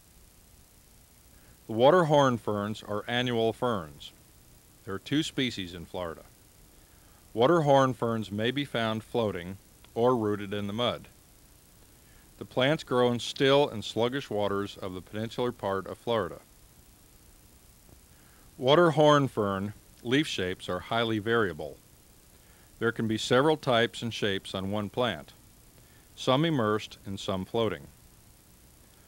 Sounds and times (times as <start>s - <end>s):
Speech: 1.7s - 4.2s, 4.9s - 6.3s, 7.3s - 11.2s, 12.4s - 16.5s, 18.6s - 21.8s, 22.8s - 25.4s, 26.2s - 28.0s.